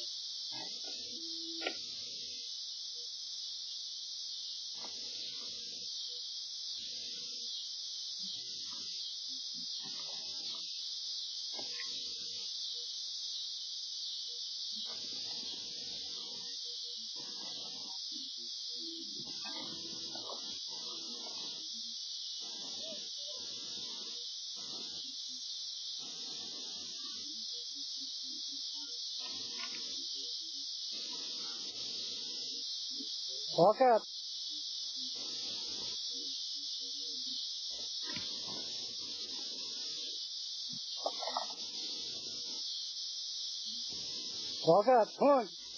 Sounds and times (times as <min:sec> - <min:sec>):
Speech: 0:33.4 - 0:34.1, 0:44.6 - 0:45.6.